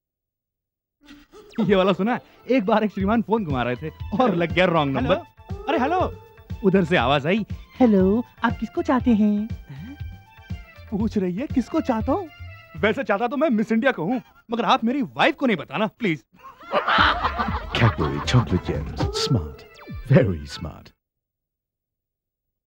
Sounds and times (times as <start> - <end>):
Music: 1.5 - 15.1, 16.9 - 21.0
Speech: 17.7 - 21.0.